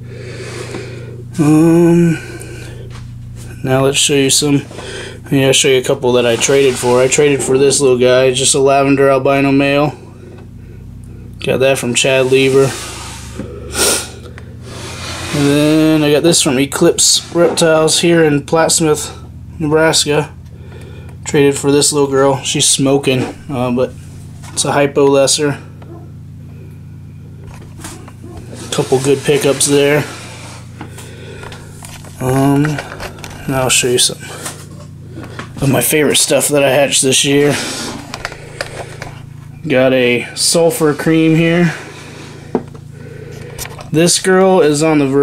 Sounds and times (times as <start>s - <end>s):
Speech: 1.4s - 2.2s, 3.6s - 4.7s, 5.3s - 10.0s, 11.4s - 12.8s, 15.3s - 20.4s, 21.3s - 24.0s, 24.6s - 25.7s, 28.6s - 30.2s, 32.2s - 34.3s, 35.6s - 37.6s, 39.6s - 41.8s, 43.9s - 45.2s.